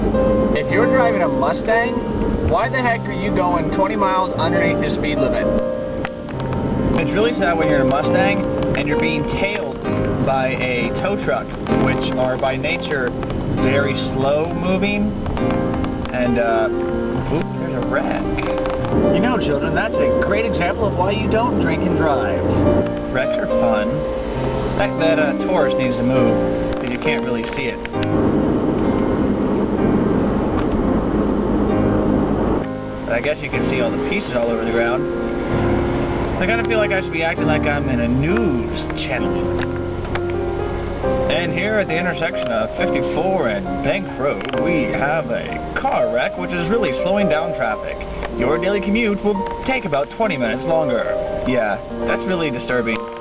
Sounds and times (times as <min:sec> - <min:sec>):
Car: 0:00.0 - 0:53.2
Music: 0:00.0 - 0:53.2
Speech: 0:00.6 - 0:05.6, 0:07.0 - 0:15.2, 0:16.1 - 0:18.5, 0:19.1 - 0:24.0, 0:24.8 - 0:27.8, 0:33.1 - 0:35.0, 0:36.4 - 0:39.5, 0:41.3 - 0:53.0.